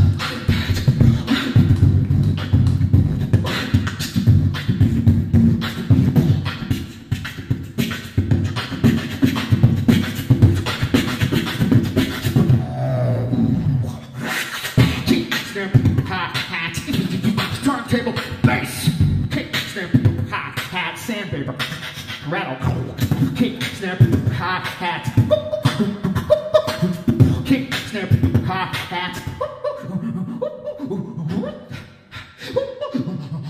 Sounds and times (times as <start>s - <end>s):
Beatboxing: 0.0s - 33.4s.